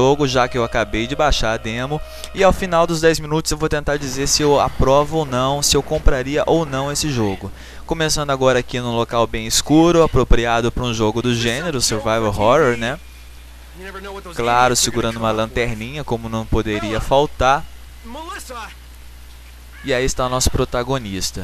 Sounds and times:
Speech: 0.0s - 13.0s, 13.8s - 18.8s, 19.8s - 21.4s.

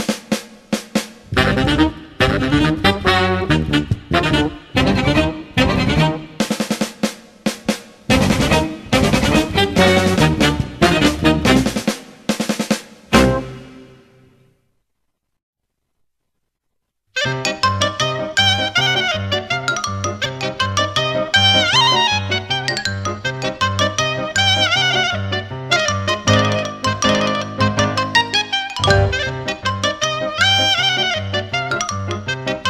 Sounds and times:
Music: 0.0s - 14.6s, 17.2s - 32.7s.

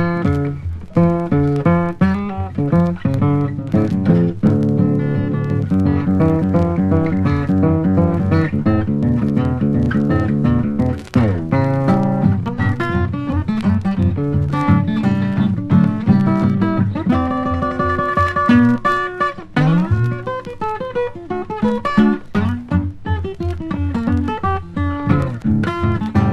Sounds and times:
Bass guitar: 0.0s - 20.4s, 22.2s - 26.3s
Blues: 0.0s - 26.3s.

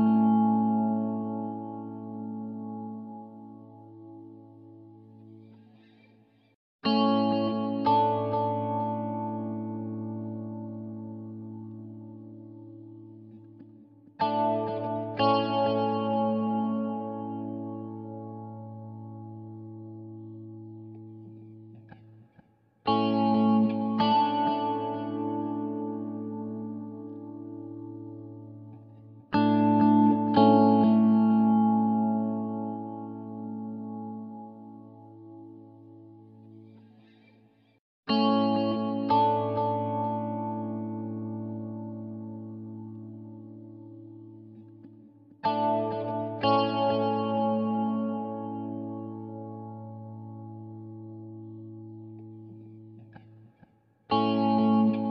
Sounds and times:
Music: 0.0s - 55.1s.

